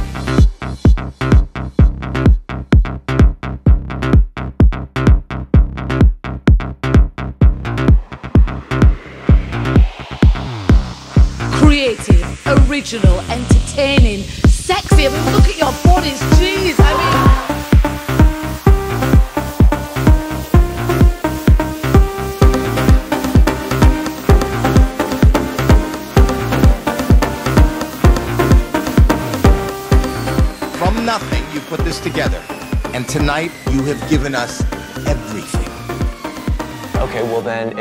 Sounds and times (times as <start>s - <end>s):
Music: 0.0s - 37.8s
Speech: 11.6s - 17.4s, 37.0s - 37.8s.